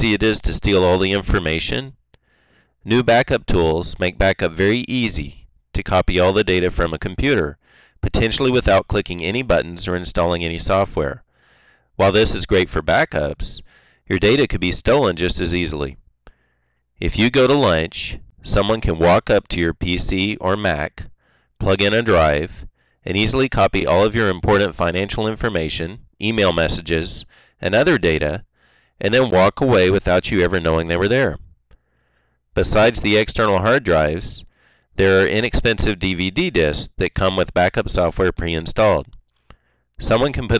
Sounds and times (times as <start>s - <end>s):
Speech: 0.0s - 2.0s, 2.8s - 11.3s, 12.0s - 16.0s, 17.0s - 31.5s, 32.6s - 39.2s, 40.0s - 40.6s.